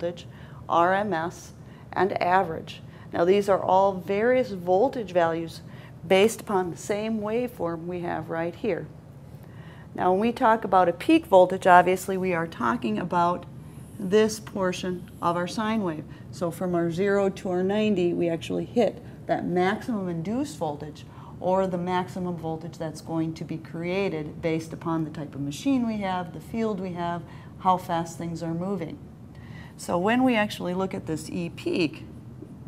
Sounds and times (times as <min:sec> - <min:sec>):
Speech: 0:00.0 - 0:08.9, 0:10.0 - 0:29.0, 0:29.8 - 0:32.1
Inside, small room: 0:00.0 - 0:32.6.